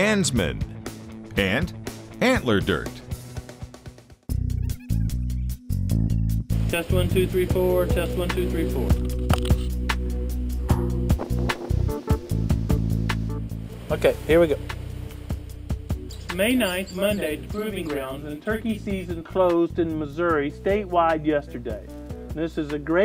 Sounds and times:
Speech: 0.0 - 0.6, 1.3 - 3.0, 6.7 - 9.0, 13.9 - 14.6, 16.3 - 23.0
Music: 0.0 - 23.0
Bird: 16.1 - 18.2.

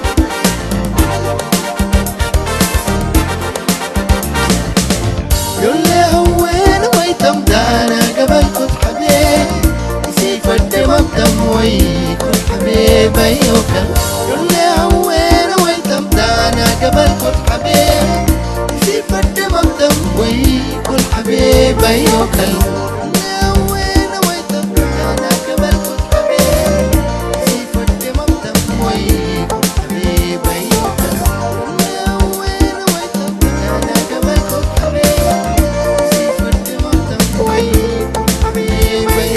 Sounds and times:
Music of Africa: 0.0 - 39.3.

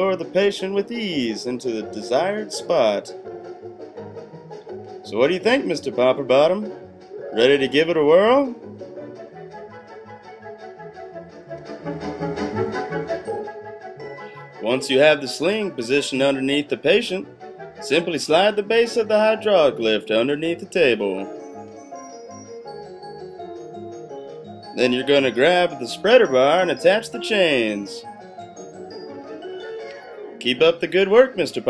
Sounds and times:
Speech: 0.0 - 3.2, 5.1 - 6.7, 7.4 - 8.6, 14.6 - 17.2, 17.8 - 21.3, 24.8 - 28.0, 30.4 - 31.7.

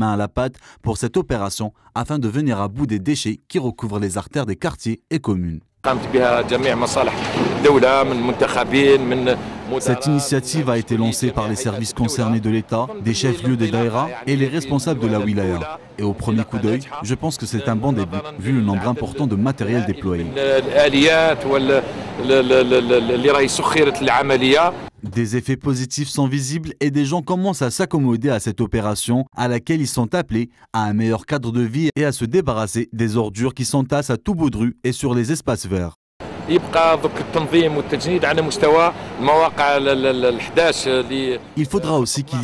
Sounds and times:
Speech: 0.0 - 42.4.

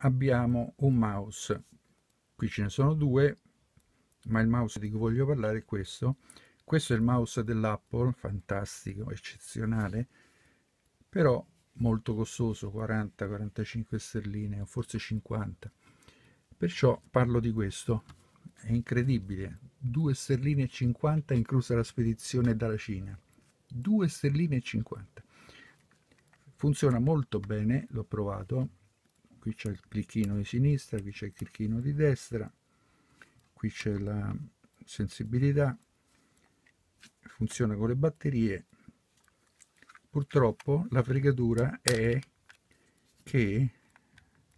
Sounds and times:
Speech: 0.0 - 1.7, 2.4 - 3.4, 4.2 - 10.1, 11.1 - 15.8, 16.6 - 25.2, 26.6 - 28.8, 29.4 - 32.6, 33.6 - 35.8, 37.3 - 38.7, 40.1 - 42.3, 43.2 - 43.8.

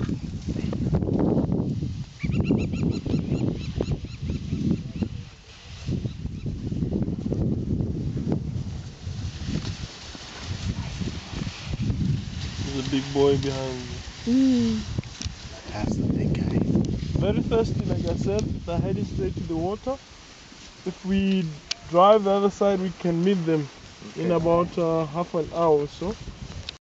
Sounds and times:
Speech: 12.7 - 14.8, 17.2 - 20.0, 20.9 - 26.2
Stream: 20.3 - 25.8.

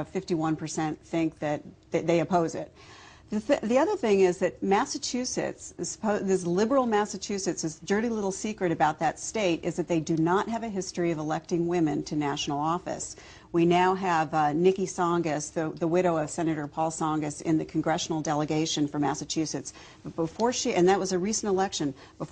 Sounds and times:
Female speech, woman speaking: 0.0 - 2.7, 3.3 - 22.3.

